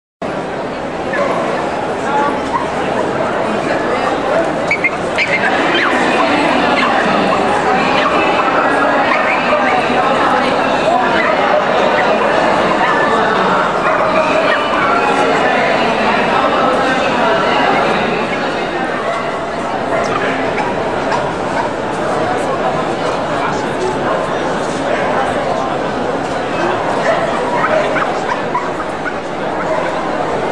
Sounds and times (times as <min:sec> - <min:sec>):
Bow-wow: 0:04.8 - 0:07.1, 0:08.0 - 0:09.8, 0:11.1 - 0:13.2, 0:13.8 - 0:15.2, 0:27.0 - 0:30.0.